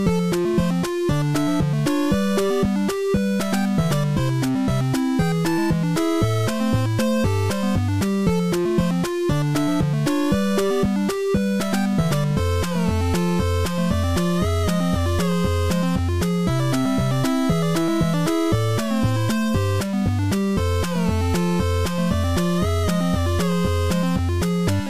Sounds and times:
Music: 0.0 - 24.9.

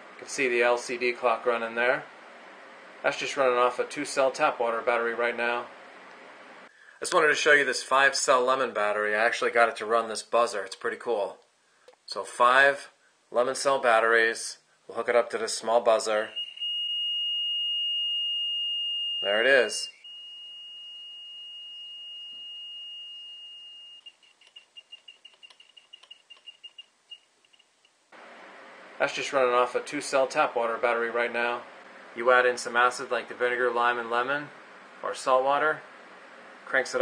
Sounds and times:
Speech: 0.2 - 2.1, 3.0 - 5.7, 7.0 - 11.4, 12.1 - 16.4, 19.2 - 19.9, 29.0 - 35.8, 36.6 - 37.0.

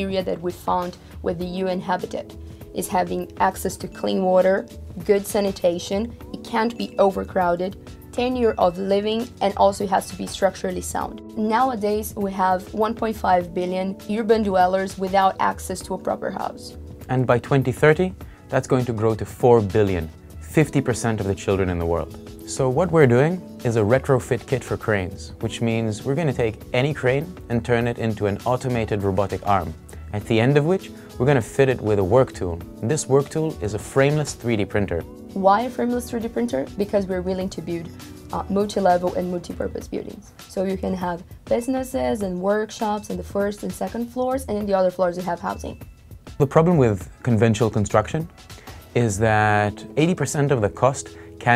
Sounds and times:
Speech: 0.0 - 45.8, 46.4 - 48.3, 49.0 - 51.5
Music: 0.0 - 51.5.

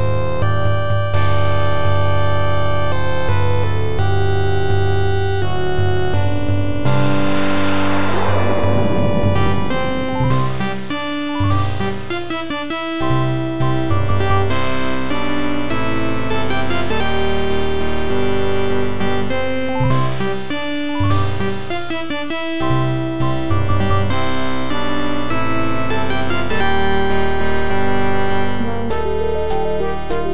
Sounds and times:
Music: 0.0 - 30.3.

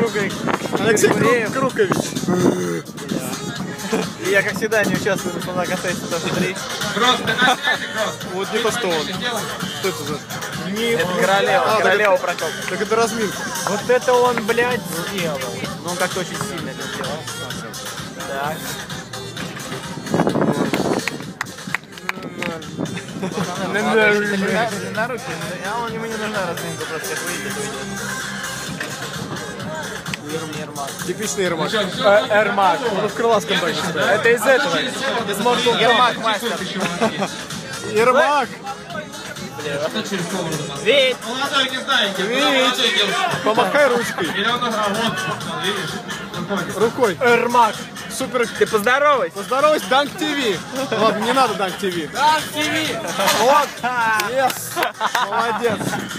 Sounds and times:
Music: 0.0 - 56.1.

